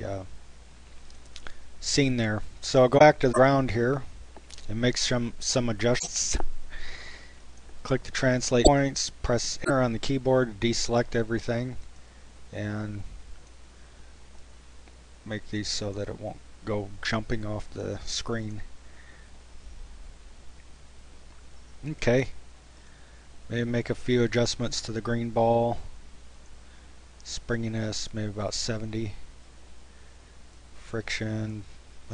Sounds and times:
Speech: 0:00.0 - 0:00.3, 0:01.8 - 0:06.4, 0:07.8 - 0:11.8, 0:12.5 - 0:13.1, 0:15.2 - 0:18.7, 0:21.8 - 0:22.4, 0:23.5 - 0:25.9, 0:27.2 - 0:29.2, 0:30.8 - 0:32.1.

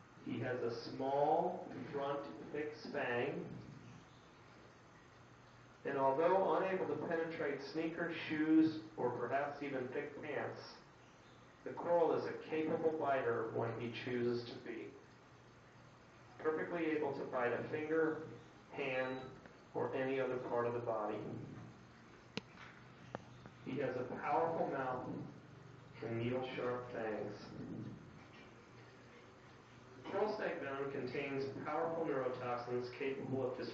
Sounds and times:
Inside, small room: 0:00.0 - 0:33.7
Speech: 0:00.2 - 0:03.7, 0:05.8 - 0:10.9, 0:11.6 - 0:15.0, 0:16.4 - 0:21.7, 0:23.6 - 0:28.0, 0:30.0 - 0:33.7.

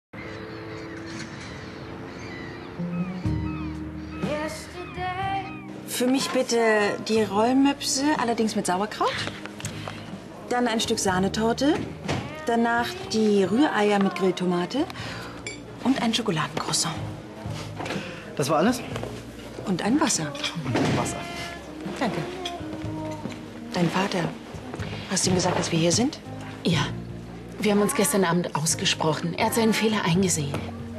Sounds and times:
Music: 0:00.2 - 0:30.9.

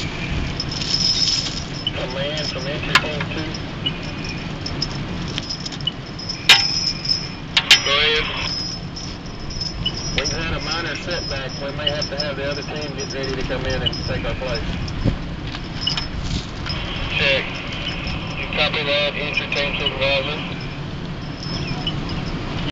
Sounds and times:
Speech: 0:02.0 - 0:03.6, 0:07.8 - 0:08.5, 0:10.2 - 0:14.7, 0:17.1 - 0:17.5, 0:18.4 - 0:20.5.

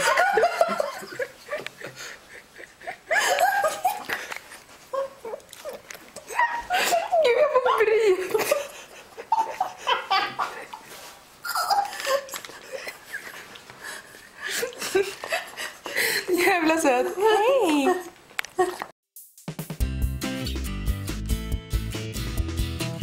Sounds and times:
Belly laugh: 0:00.0 - 0:05.4, 0:06.2 - 0:10.8, 0:11.4 - 0:16.3.

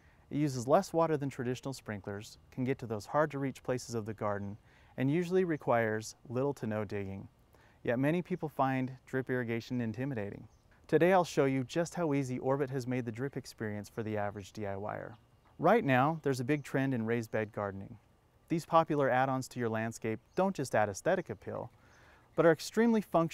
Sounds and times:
Speech: 0:00.3 - 0:21.8, 0:22.4 - 0:23.3.

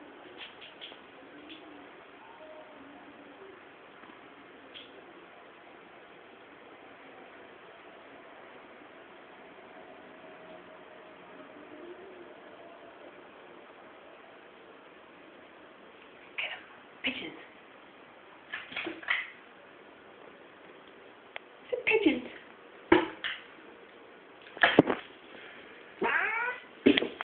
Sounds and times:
Cat: 0:01.5 - 0:03.0, 0:26.0 - 0:26.7
Speech: 0:16.4 - 0:17.5, 0:21.7 - 0:22.5.

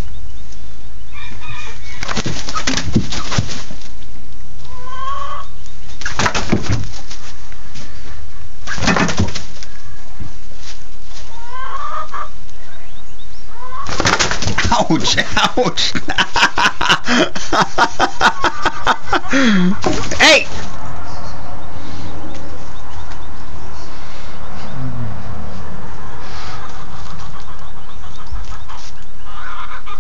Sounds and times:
Speech: 0:14.6 - 0:16.0, 0:19.6 - 0:20.6.

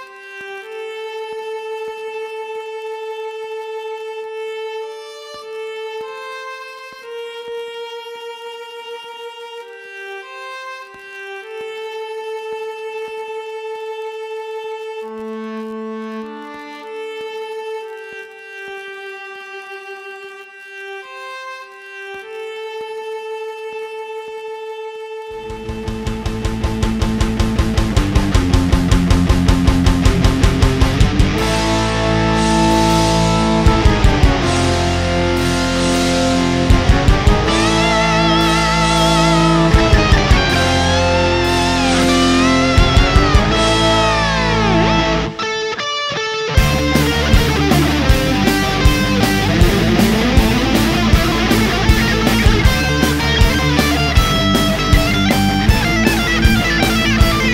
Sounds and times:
Strum: 0:00.0 - 0:57.5
Bass guitar: 0:25.4 - 0:57.5.

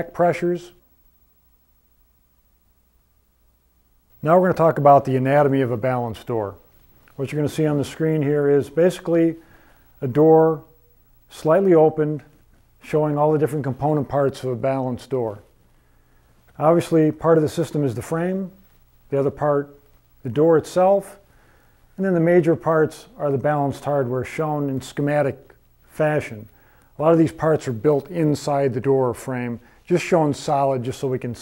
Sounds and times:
Speech: 0:00.0 - 0:00.8, 0:04.2 - 0:09.4, 0:10.0 - 0:10.7, 0:11.3 - 0:15.6, 0:16.6 - 0:21.3, 0:22.0 - 0:31.4.

